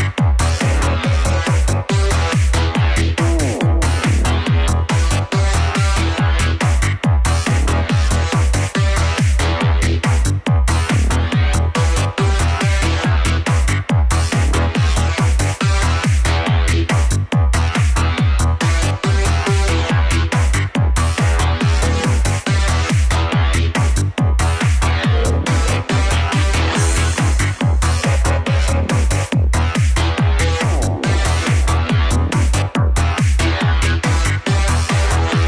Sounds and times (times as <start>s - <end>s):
Trance music: 0.0s - 35.4s.